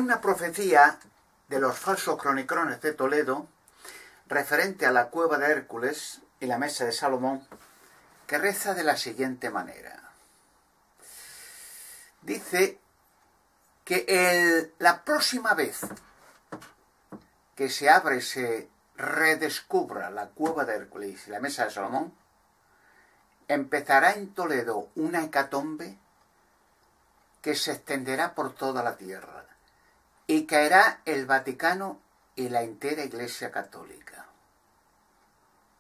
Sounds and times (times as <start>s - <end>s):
Speech: 0.0s - 3.5s, 4.3s - 7.6s, 8.3s - 10.2s, 12.2s - 12.8s, 13.8s - 16.0s, 17.6s - 22.2s, 23.5s - 26.0s, 27.4s - 29.6s, 30.3s - 34.4s.